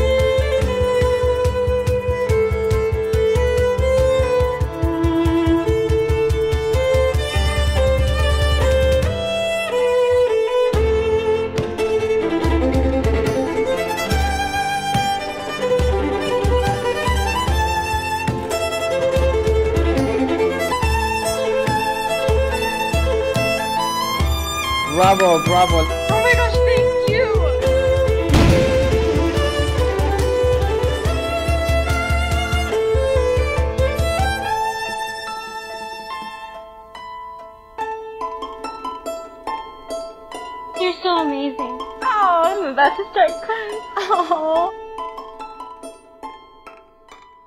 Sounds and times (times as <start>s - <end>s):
Music: 0.0s - 47.4s.